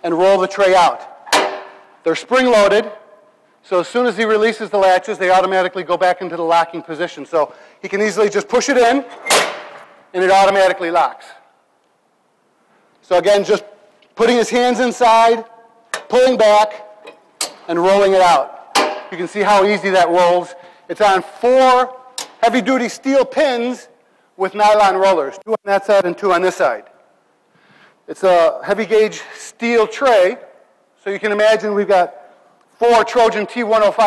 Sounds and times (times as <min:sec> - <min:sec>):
Speech: 0:00.0 - 0:01.1, 0:02.0 - 0:03.0, 0:03.6 - 0:09.1, 0:10.1 - 0:11.5, 0:13.0 - 0:15.5, 0:16.1 - 0:16.9, 0:17.7 - 0:26.9, 0:28.1 - 0:32.2, 0:32.8 - 0:34.0.